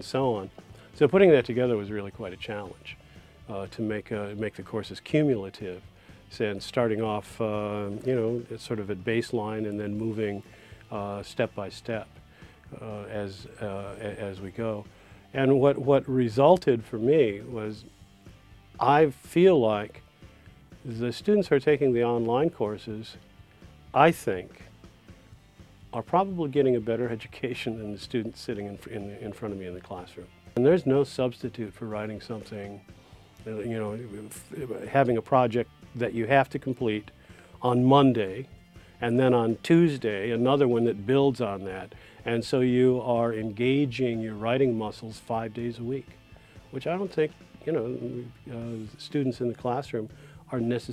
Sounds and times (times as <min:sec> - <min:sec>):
Speech: 0:00.0 - 0:12.1, 0:12.7 - 0:17.9, 0:18.8 - 0:20.0, 0:20.8 - 0:23.2, 0:24.0 - 0:24.7, 0:25.9 - 0:46.1, 0:46.7 - 0:50.9
Music: 0:00.0 - 0:50.9.